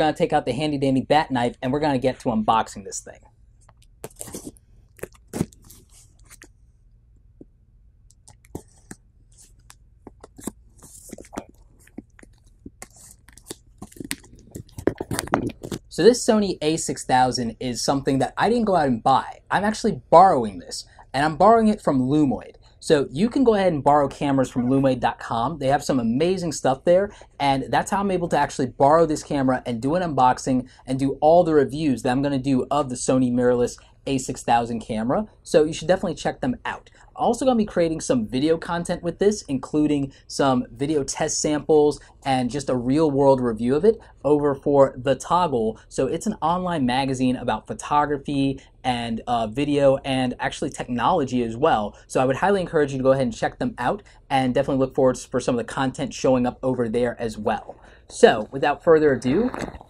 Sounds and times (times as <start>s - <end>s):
Speech: 0.0s - 3.3s, 15.9s - 59.8s
Inside, small room: 0.0s - 59.8s.